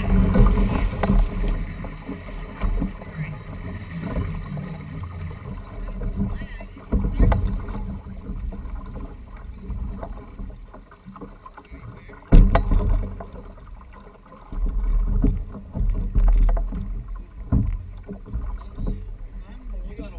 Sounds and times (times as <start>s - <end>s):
Boat, Water vehicle: 0.0s - 20.1s.